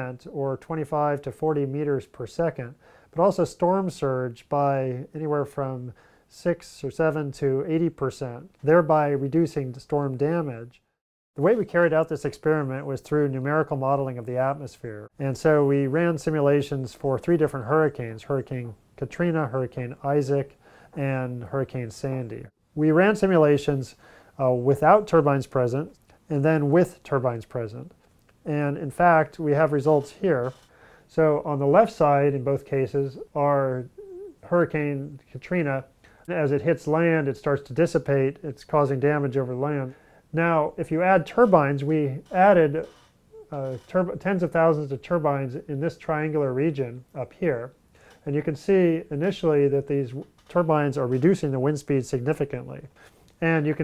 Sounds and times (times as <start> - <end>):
Speech: 0.0 - 10.8, 11.4 - 53.8.